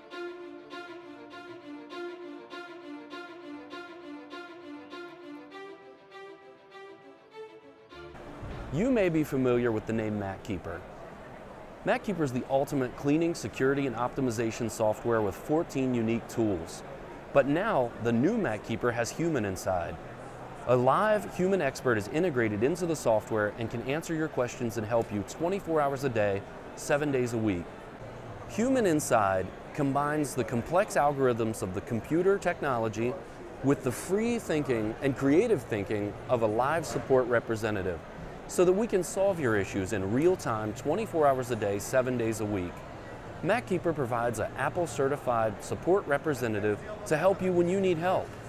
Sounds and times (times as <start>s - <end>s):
Speech: 8.7s - 10.8s, 11.8s - 20.0s, 20.7s - 27.7s, 28.5s - 42.8s, 43.4s - 48.3s.